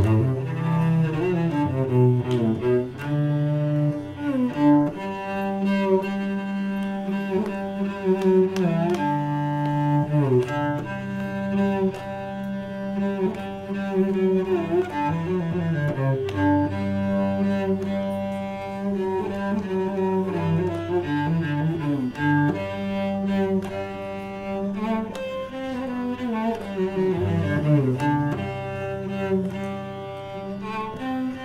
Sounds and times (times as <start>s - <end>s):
Cello: 0.0s - 31.4s
Double bass: 0.0s - 31.4s.